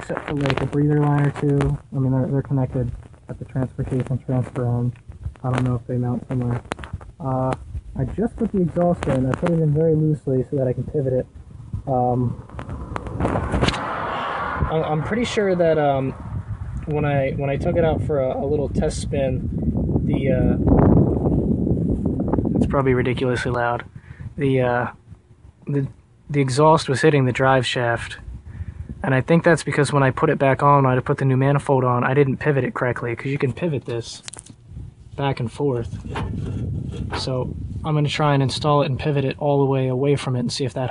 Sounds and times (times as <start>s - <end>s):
Speech: 0.0s - 12.4s, 14.6s - 16.2s, 16.8s - 19.5s, 20.1s - 20.7s, 22.6s - 25.0s, 25.6s - 28.3s, 29.0s - 34.3s, 35.2s - 36.3s, 37.1s - 40.9s.